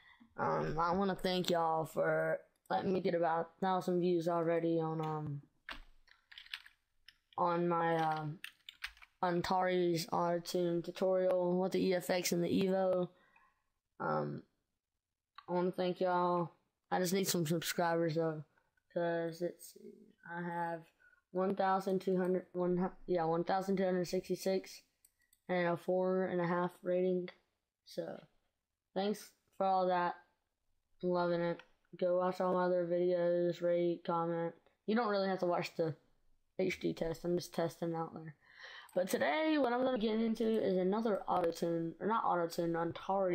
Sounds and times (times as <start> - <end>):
Speech: 0.4 - 5.4, 7.4 - 8.4, 9.2 - 13.1, 14.0 - 14.5, 15.4 - 24.9, 25.5 - 28.2, 29.0 - 30.2, 31.0 - 36.0, 36.6 - 38.3, 38.9 - 43.3.